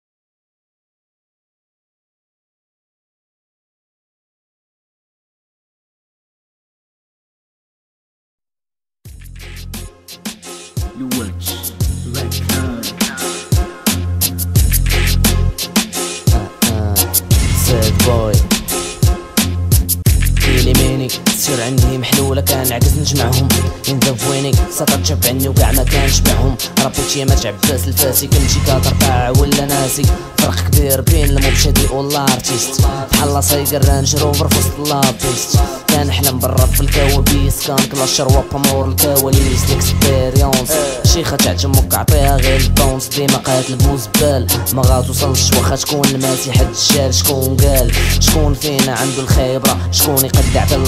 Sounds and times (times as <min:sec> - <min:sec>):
Music: 0:09.1 - 0:50.8
Rapping: 0:10.9 - 0:13.5, 0:16.3 - 0:18.6, 0:20.4 - 0:50.8.